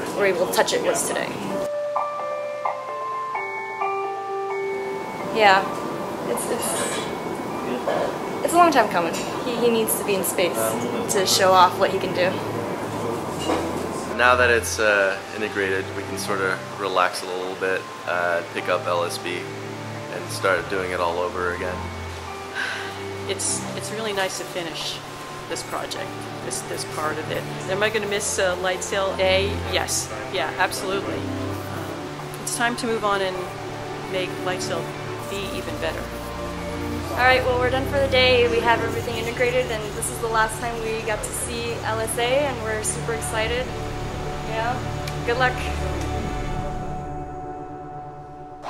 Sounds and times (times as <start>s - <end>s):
Marimba, xylophone: 0.0s - 35.6s.